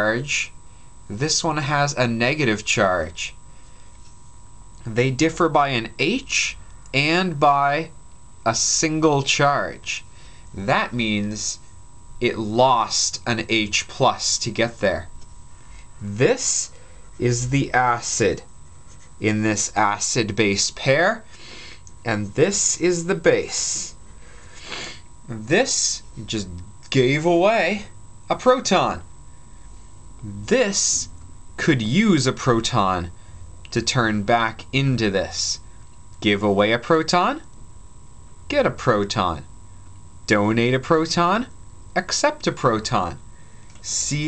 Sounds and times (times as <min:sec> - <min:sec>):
Narration, monologue: 0:00.0 - 0:44.2.